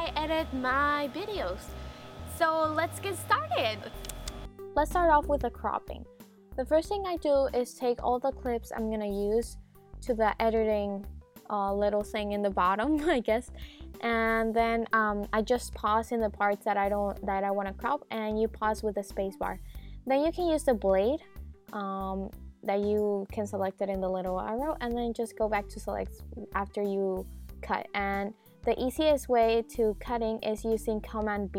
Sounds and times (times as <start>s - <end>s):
Speech: 0.0s - 1.7s, 2.3s - 4.0s, 4.8s - 31.5s
Music: 0.0s - 31.5s.